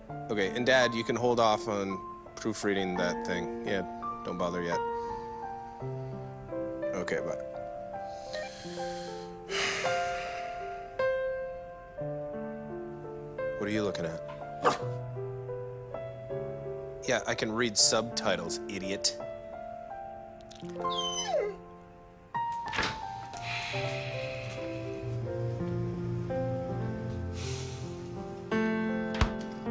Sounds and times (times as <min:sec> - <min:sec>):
Music: 0:00.0 - 0:29.7
Speech: 0:00.3 - 0:04.8, 0:06.9 - 0:07.4, 0:13.6 - 0:14.2, 0:17.0 - 0:19.2.